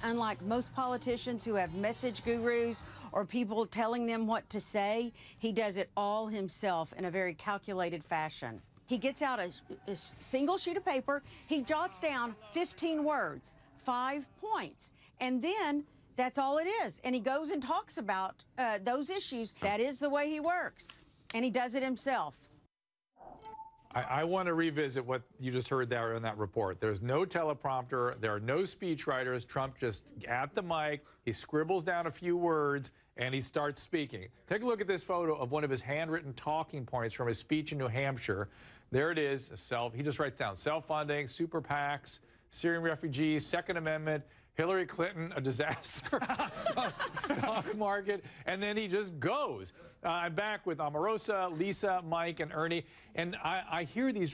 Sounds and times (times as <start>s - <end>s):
Female speech, woman speaking: 0.0s - 22.4s
Conversation: 0.0s - 54.3s
Narration, monologue: 0.0s - 54.3s
Male speech, man speaking: 23.9s - 46.2s, 47.3s - 54.3s.